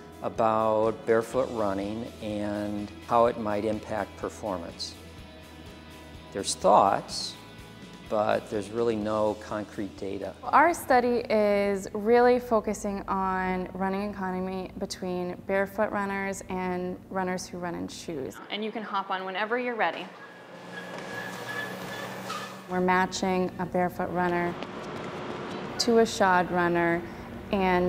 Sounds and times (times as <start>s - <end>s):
Inside, large room or hall: 20.1s - 22.6s
Run: 24.6s - 26.0s.